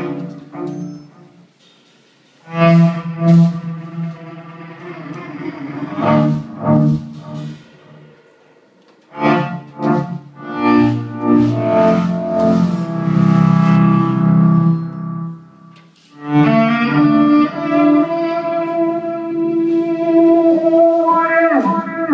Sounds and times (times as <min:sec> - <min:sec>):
Double bass: 0:00.0 - 0:01.4, 0:02.5 - 0:05.2, 0:05.8 - 0:08.0, 0:09.1 - 0:22.1
Cello: 0:00.0 - 0:01.6, 0:02.4 - 0:08.3, 0:08.9 - 0:22.1.